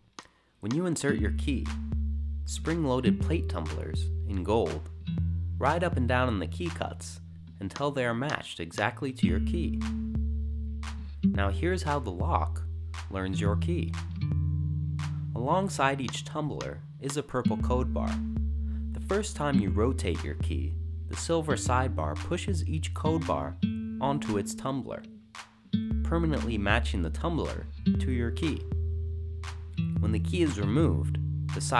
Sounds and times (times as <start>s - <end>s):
Music: 0.2s - 31.7s
Speech: 0.6s - 1.8s, 2.5s - 4.9s, 5.6s - 9.8s, 11.4s - 14.0s, 15.4s - 18.2s, 18.9s - 25.1s, 26.0s - 28.6s, 30.0s - 31.7s.